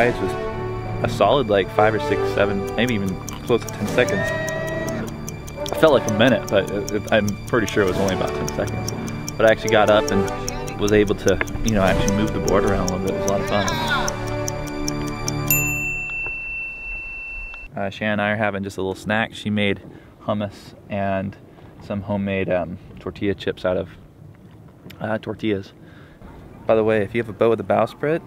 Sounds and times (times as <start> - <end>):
Music: 0.0 - 15.8
Speech: 5.8 - 8.7, 9.4 - 14.0, 17.7 - 24.0, 24.9 - 25.8, 26.6 - 28.2.